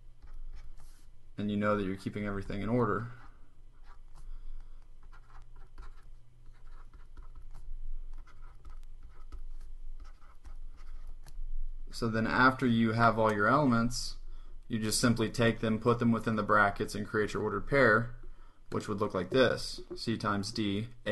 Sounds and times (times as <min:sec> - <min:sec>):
Writing: 0:00.0 - 0:01.1, 0:02.4 - 0:11.4, 0:17.4 - 0:20.8.